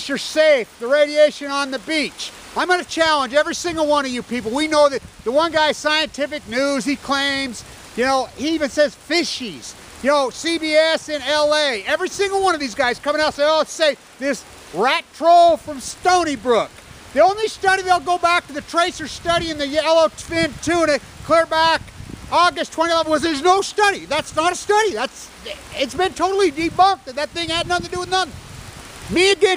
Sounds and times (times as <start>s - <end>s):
Speech: 0.0s - 28.3s, 29.1s - 29.5s.